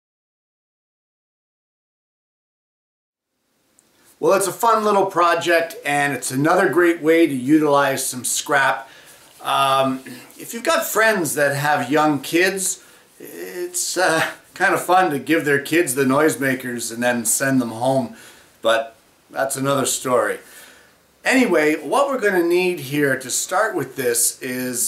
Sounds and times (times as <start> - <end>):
Speech: 4.2 - 20.4, 21.2 - 24.8.